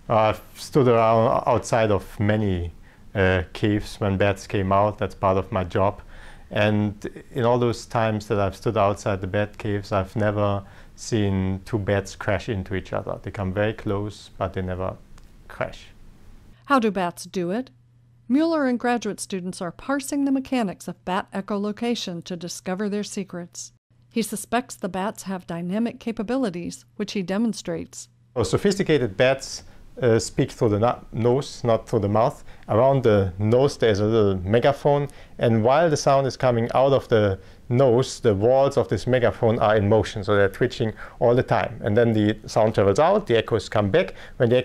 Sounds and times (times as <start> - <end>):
Narration, monologue: 0.0 - 44.6.